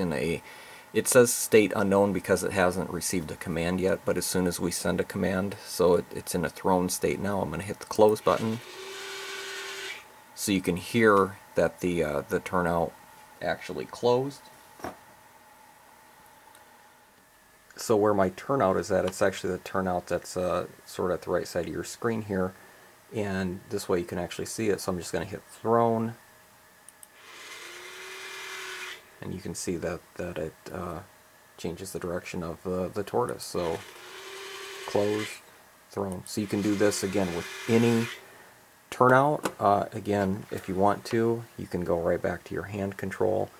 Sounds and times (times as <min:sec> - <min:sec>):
Speech: 0:00.0 - 0:00.4, 0:01.0 - 0:08.6, 0:10.4 - 0:14.5, 0:17.7 - 0:26.2, 0:29.2 - 0:33.8, 0:34.9 - 0:38.2, 0:38.9 - 0:43.5.